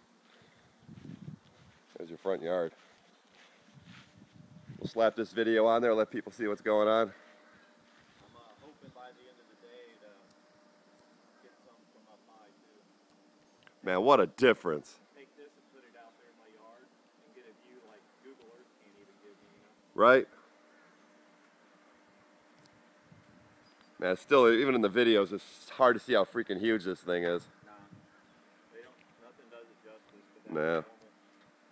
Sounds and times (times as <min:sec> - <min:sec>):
Outside, urban or manmade: 0:00.0 - 0:31.7
Speech: 0:01.9 - 0:02.8, 0:04.8 - 0:07.2, 0:08.2 - 0:10.3, 0:11.4 - 0:12.8, 0:13.8 - 0:20.3, 0:24.0 - 0:28.0, 0:28.7 - 0:31.1.